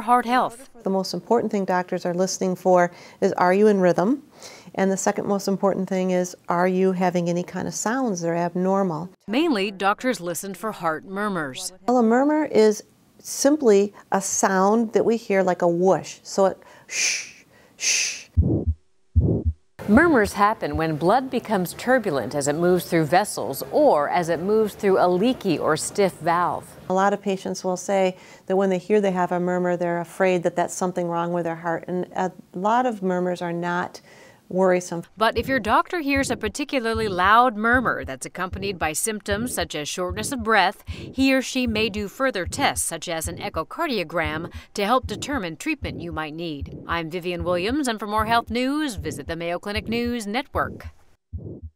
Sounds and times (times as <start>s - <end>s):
Speech: 0.0s - 16.6s, 19.8s - 50.9s
Heart murmur: 18.3s - 19.6s, 35.1s - 51.7s.